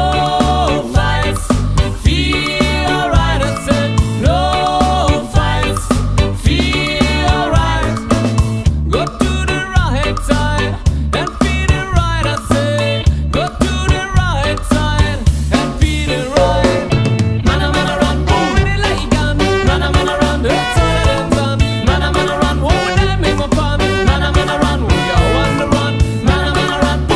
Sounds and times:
Music: 0.0 - 27.1.

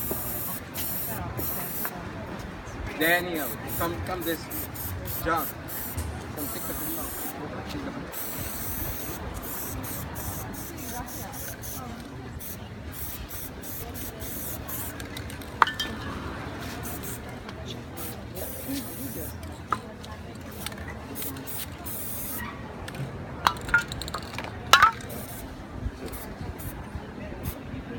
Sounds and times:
Spray: 0.0 - 1.9, 3.4 - 7.4, 8.1 - 15.1, 16.6 - 17.3, 18.0 - 19.4, 20.5 - 22.4, 24.8 - 26.8
Speech: 0.0 - 15.1, 15.8 - 23.4, 24.4 - 27.9.

